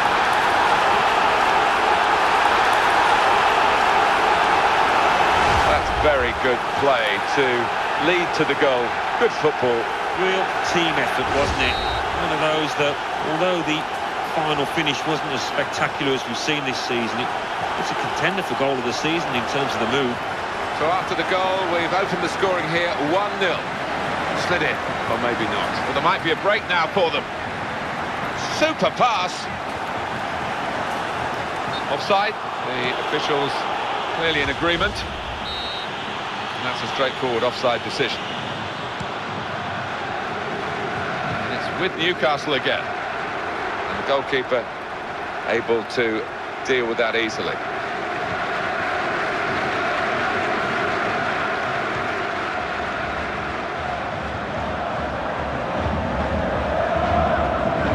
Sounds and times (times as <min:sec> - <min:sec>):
Speech: 0:05.7 - 0:20.2, 0:20.8 - 0:23.7, 0:24.4 - 0:27.2, 0:28.4 - 0:29.5, 0:31.8 - 0:35.1, 0:36.6 - 0:38.2, 0:41.5 - 0:42.9, 0:43.9 - 0:44.7, 0:45.5 - 0:47.6.